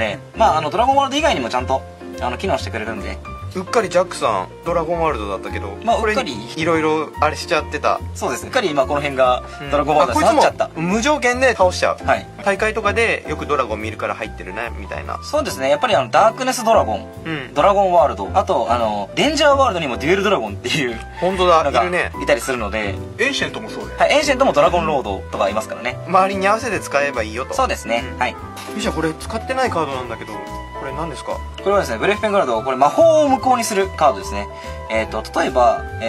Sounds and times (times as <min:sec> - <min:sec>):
Music: 0:00.0 - 0:36.0
Speech: 0:00.0 - 0:36.0.